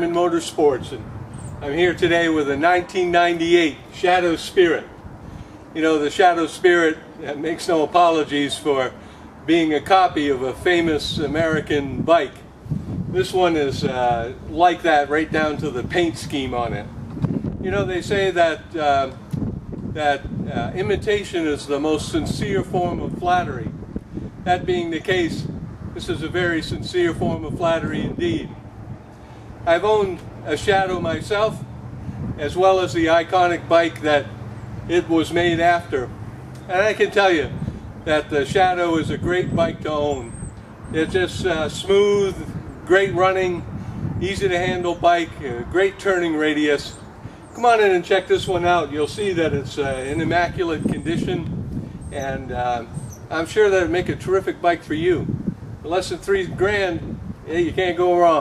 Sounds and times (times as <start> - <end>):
Speech: 0.0 - 1.0, 1.6 - 4.9, 5.8 - 8.9, 9.5 - 12.4, 13.2 - 16.9, 17.6 - 19.1, 20.0 - 23.7, 24.5 - 28.5, 29.7 - 31.6, 32.4 - 34.3, 34.9 - 36.1, 36.7 - 40.3, 40.9 - 43.6, 44.2 - 47.0, 47.6 - 51.5, 52.1 - 58.4.